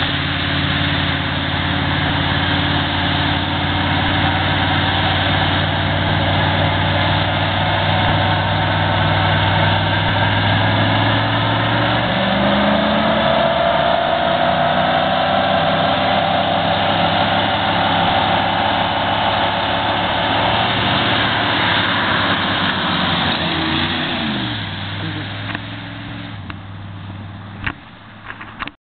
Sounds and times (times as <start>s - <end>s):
Car: 0.0s - 28.8s.